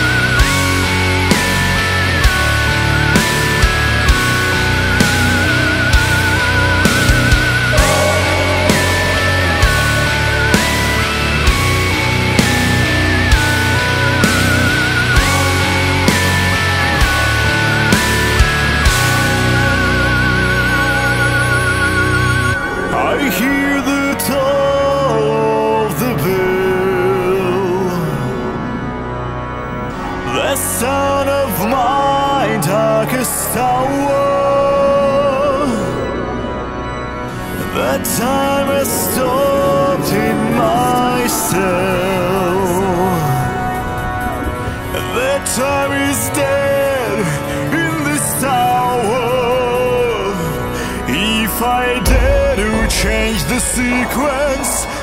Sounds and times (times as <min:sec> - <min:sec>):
Music: 0:00.0 - 0:55.0.